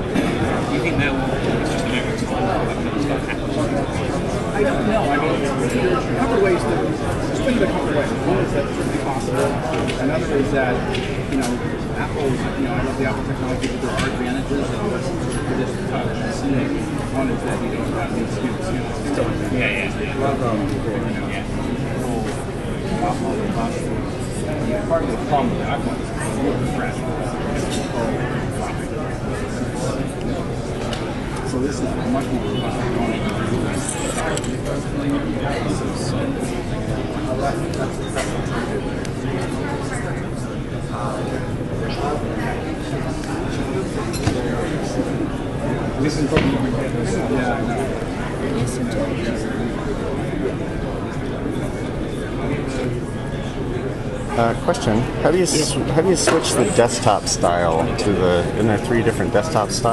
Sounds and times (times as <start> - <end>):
Speech: 0.0 - 59.9.